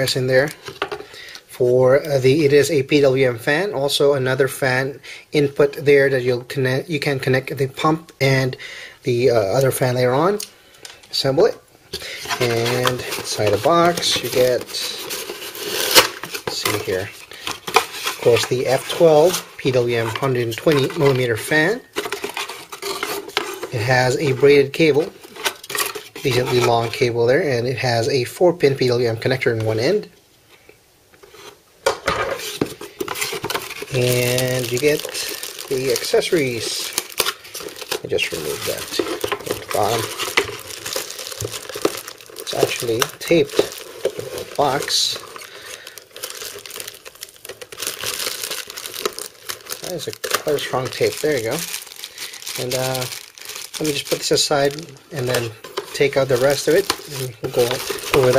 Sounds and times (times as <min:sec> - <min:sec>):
Speech: 0:00.0 - 0:00.6, 0:01.5 - 0:10.5, 0:11.1 - 0:11.6, 0:12.4 - 0:15.0, 0:16.5 - 0:17.2, 0:18.2 - 0:21.9, 0:23.7 - 0:25.1, 0:26.2 - 0:30.2, 0:33.9 - 0:36.9, 0:38.0 - 0:40.2, 0:42.5 - 0:43.7, 0:44.4 - 0:45.2, 0:49.8 - 0:51.7, 0:52.6 - 0:53.2, 0:53.8 - 0:58.3
Inside, small room: 0:00.0 - 0:58.3
Crumpling, crinkling: 0:12.0 - 0:27.0, 0:32.3 - 0:58.3.